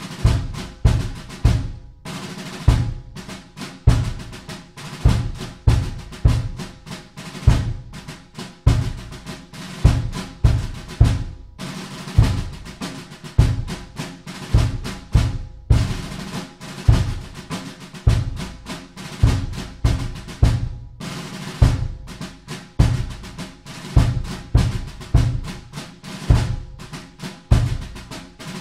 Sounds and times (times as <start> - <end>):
Music: 0.0 - 28.6.